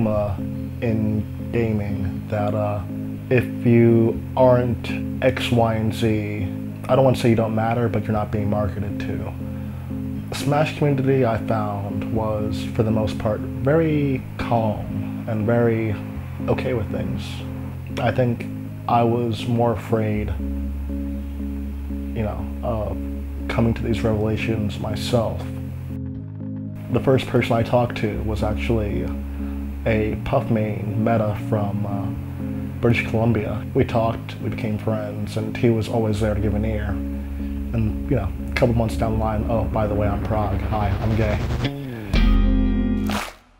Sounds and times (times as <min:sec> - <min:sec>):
Speech: 0:00.0 - 0:09.4, 0:10.3 - 0:20.4, 0:22.2 - 0:25.5, 0:26.9 - 0:29.2, 0:29.8 - 0:32.2, 0:32.8 - 0:37.0, 0:37.7 - 0:41.7
Music: 0:00.0 - 0:43.5.